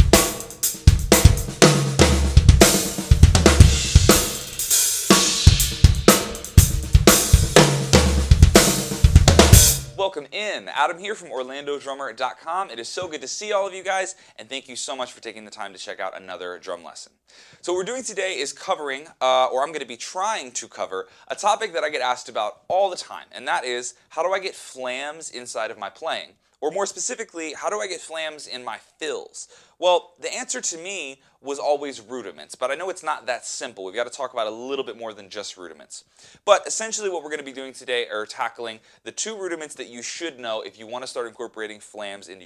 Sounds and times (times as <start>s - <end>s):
Music: 0.0s - 10.0s
Speech: 10.0s - 42.4s.